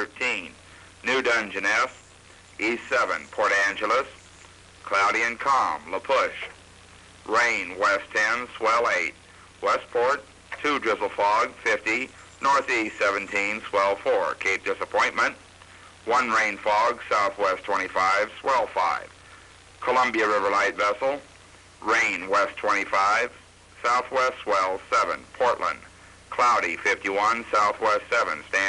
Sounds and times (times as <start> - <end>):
Speech: 0.0 - 2.0, 2.6 - 4.2, 4.8 - 6.6, 7.3 - 15.4, 16.0 - 19.2, 19.8 - 28.6.